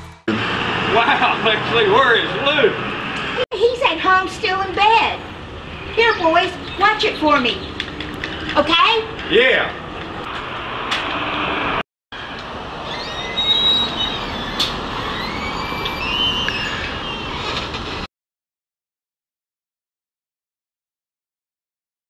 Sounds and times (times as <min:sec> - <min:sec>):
Truck: 0:00.0 - 0:03.4, 0:09.2 - 0:18.1
Outside, urban or manmade: 0:00.0 - 0:18.1
Speech: 0:00.9 - 0:02.8, 0:03.4 - 0:05.2.